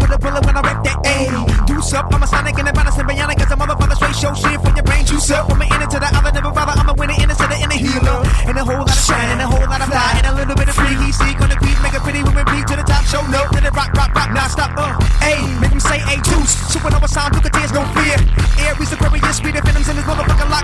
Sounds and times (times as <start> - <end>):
Pop music: 0.0 - 20.6
Rhythm and blues: 0.0 - 20.6.